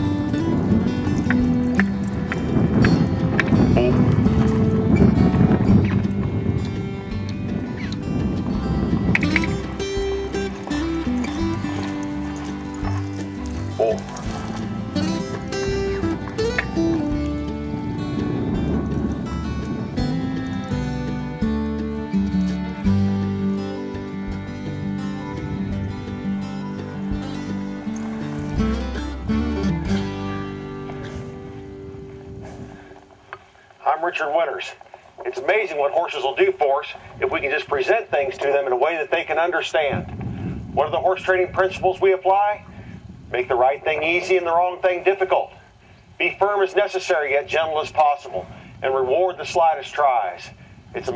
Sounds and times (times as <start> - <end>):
Music: 0.0 - 33.1
Clip-clop: 0.0 - 51.1.